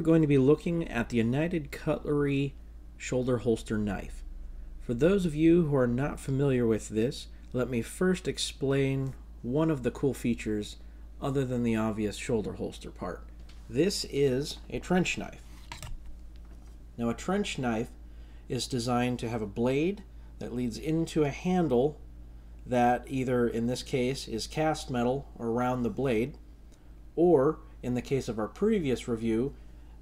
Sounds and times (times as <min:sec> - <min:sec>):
Speech: 0:00.0 - 0:04.3, 0:04.9 - 0:15.4, 0:17.0 - 0:22.0, 0:22.7 - 0:26.4, 0:27.2 - 0:29.6.